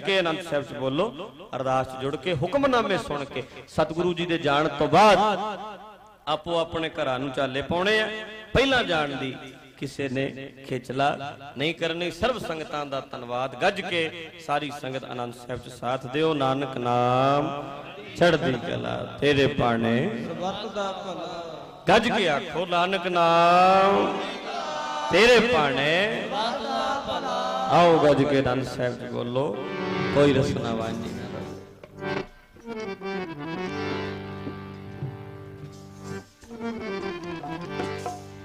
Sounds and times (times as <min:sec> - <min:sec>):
Speech: 0:00.0 - 0:05.4, 0:06.3 - 0:24.5, 0:25.1 - 0:31.5.